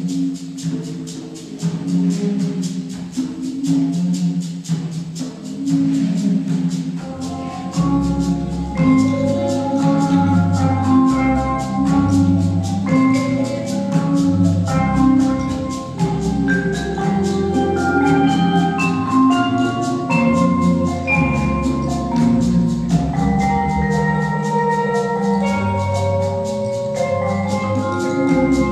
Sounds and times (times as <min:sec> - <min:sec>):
Classical music: 0:00.0 - 0:28.7
Marimba, xylophone: 0:00.0 - 0:28.7
Orchestra: 0:00.0 - 0:28.7
Vibraphone: 0:00.0 - 0:28.7.